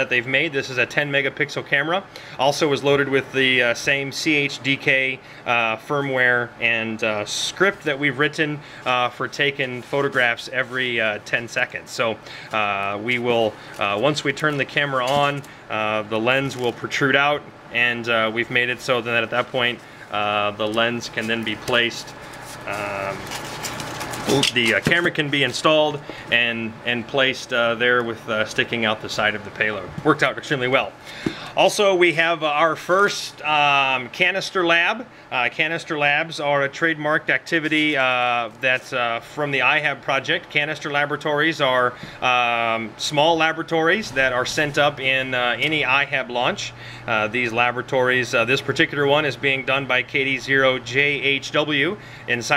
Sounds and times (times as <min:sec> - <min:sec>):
Speech: 0:00.0 - 0:23.4, 0:24.3 - 0:31.0, 0:31.6 - 0:52.5
Inside, small room: 0:00.0 - 0:52.5.